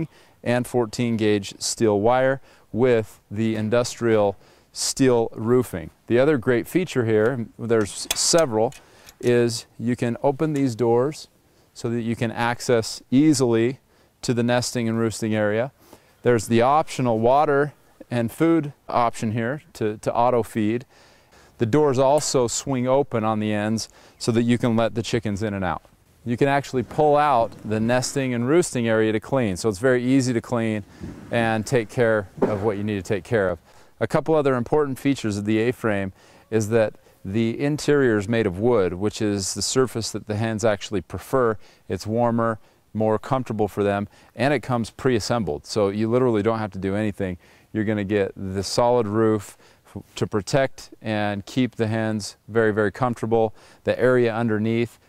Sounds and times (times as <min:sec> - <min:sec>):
Speech: 0:00.0 - 0:20.9, 0:21.6 - 0:55.0.